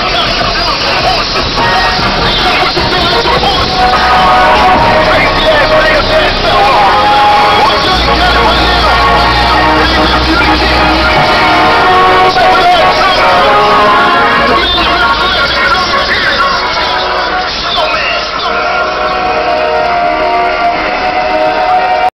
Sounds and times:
Music: 0.0s - 22.1s.

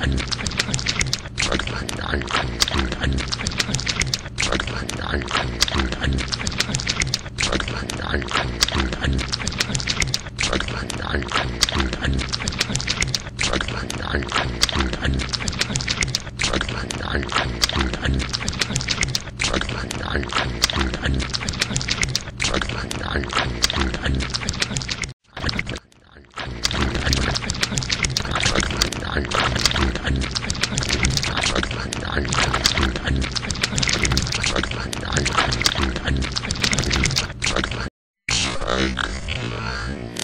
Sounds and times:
Chewing, mastication: 0.0s - 37.9s.

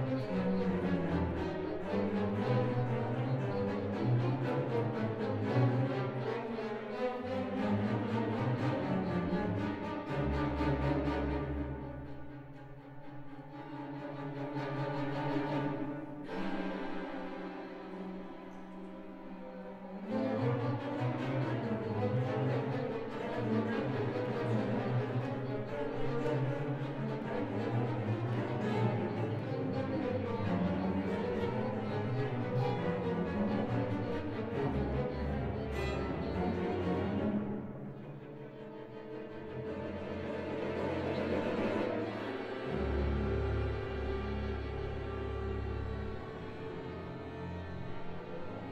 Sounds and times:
Classical music: 0.0s - 48.7s.

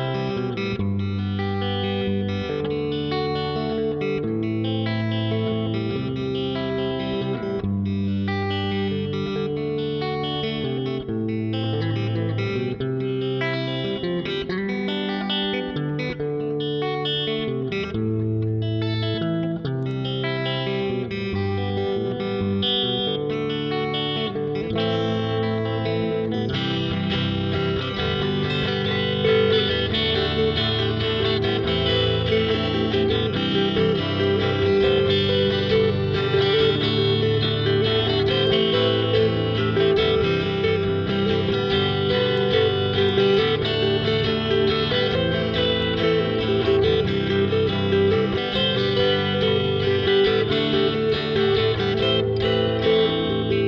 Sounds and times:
Bass guitar: 0.0s - 53.6s
Electric guitar: 0.0s - 53.6s.

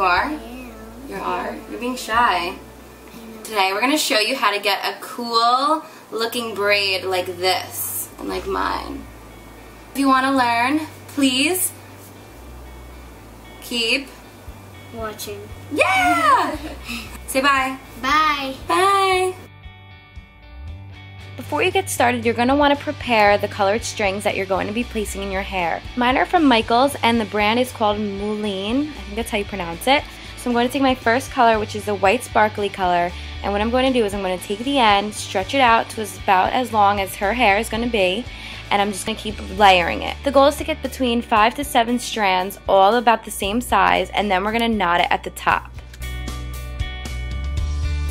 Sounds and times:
Music: 0.0s - 48.1s.

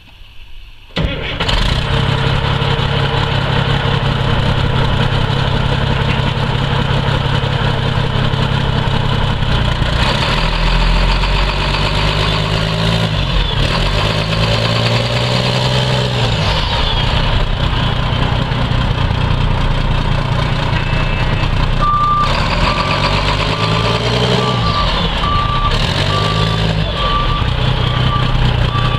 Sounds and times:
Reversing beeps: 20.7s - 28.9s.

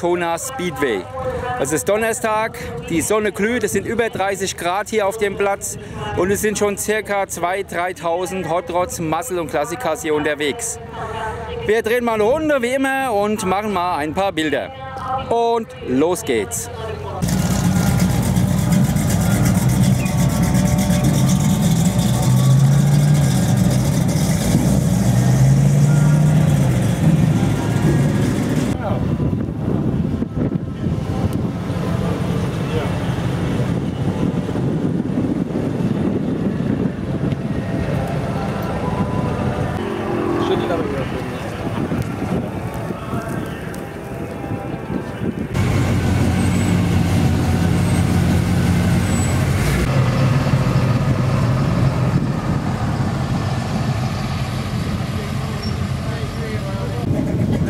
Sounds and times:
Speech: 0.0s - 17.2s, 28.8s - 29.2s, 40.4s - 41.6s.

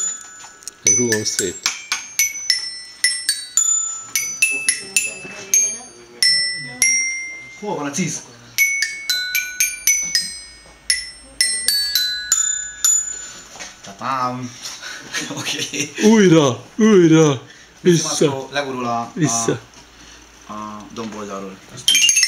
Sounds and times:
Marimba, xylophone: 0.0s - 13.9s, 21.9s - 22.2s.

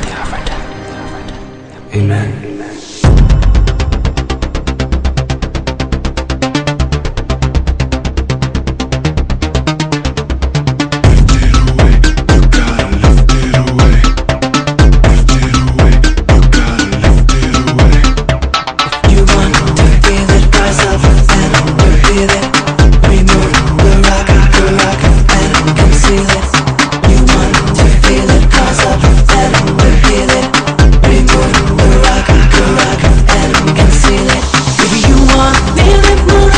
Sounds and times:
Music: 0.0s - 36.5s.

